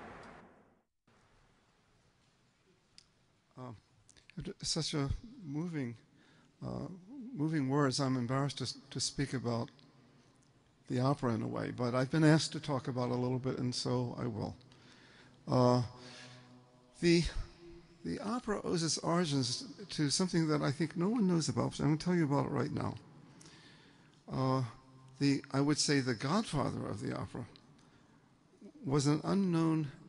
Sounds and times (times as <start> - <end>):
Speech: 3.5 - 9.8, 10.9 - 14.6, 15.5 - 16.3, 17.0 - 23.1, 24.3 - 27.6, 28.6 - 30.0.